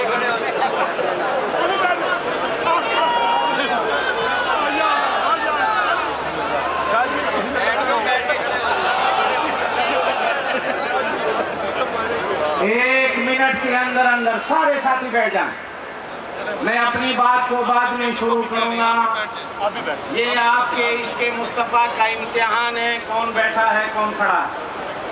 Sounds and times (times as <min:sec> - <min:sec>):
Male speech, man speaking: 0:00.0 - 0:00.7, 0:01.6 - 0:05.9, 0:06.9 - 0:09.6, 0:12.4 - 0:15.6, 0:16.5 - 0:24.6
Conversation: 0:00.0 - 0:24.7.